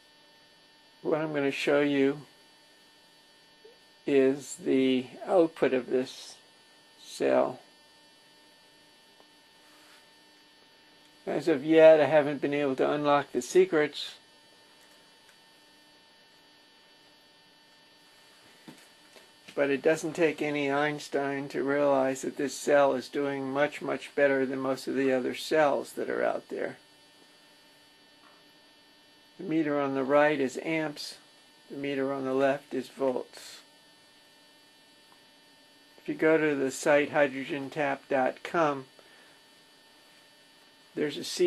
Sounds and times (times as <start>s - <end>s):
Speech: 1.0s - 2.3s, 4.1s - 6.4s, 7.0s - 7.7s, 11.3s - 14.3s, 19.5s - 26.8s, 29.4s - 33.7s, 36.0s - 38.9s, 41.0s - 41.4s.